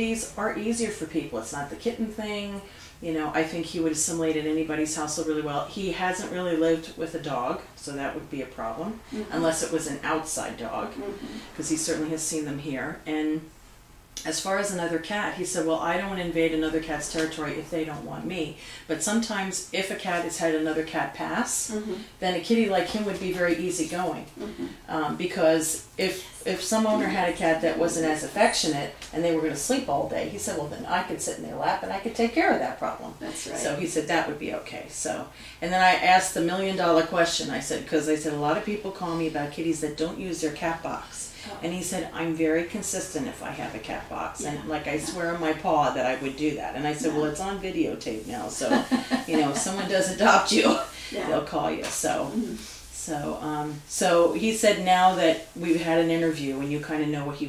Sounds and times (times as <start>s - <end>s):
Speech: 0.0s - 13.5s, 14.2s - 57.4s.